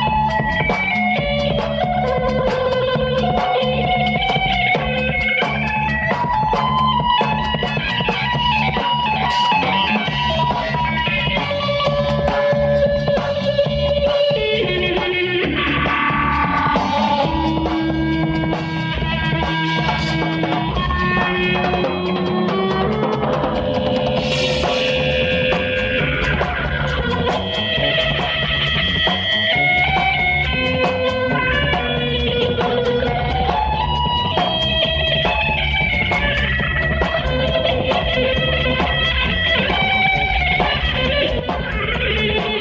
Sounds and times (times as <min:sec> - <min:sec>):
Progressive rock: 0:00.0 - 0:42.6.